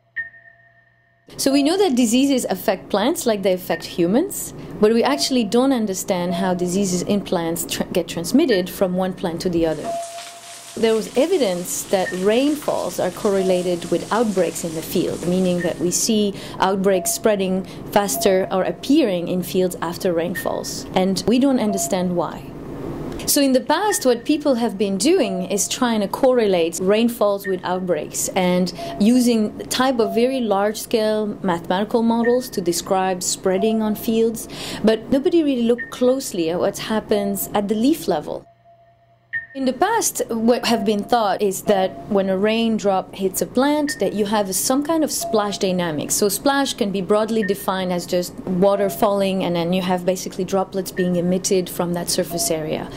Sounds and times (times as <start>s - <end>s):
Speech: 1.4s - 9.9s, 10.8s - 22.5s, 23.2s - 38.5s, 39.6s - 52.9s.